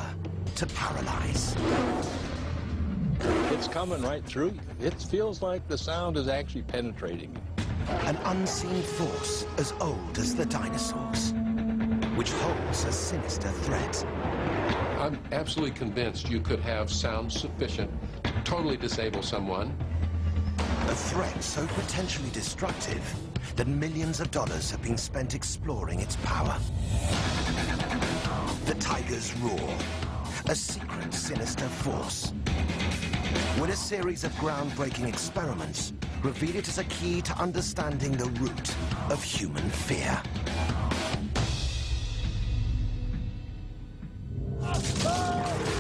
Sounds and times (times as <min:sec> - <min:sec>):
Music: 0:00.0 - 0:45.8
Speech: 0:08.0 - 0:11.3, 0:20.9 - 0:26.7, 0:30.4 - 0:32.3, 0:33.6 - 0:40.2.